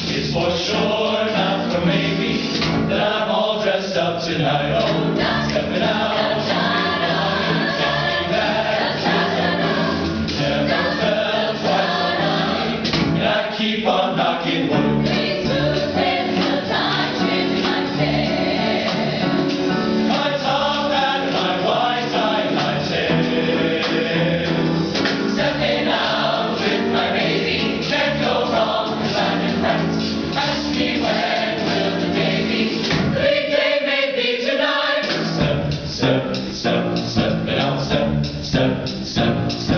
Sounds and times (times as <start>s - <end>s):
Choir: 0.0s - 39.7s.